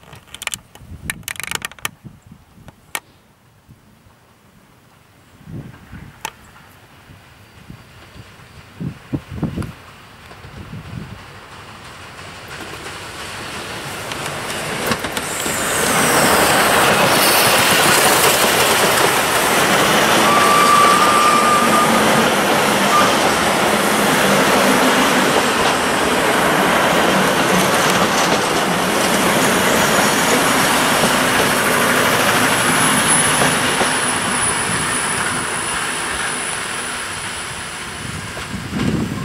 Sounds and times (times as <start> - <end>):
Railroad car, train wagon: 0.0 - 39.2
Train: 0.0 - 39.2
Clickety-clack: 9.6 - 20.1, 24.2 - 34.2.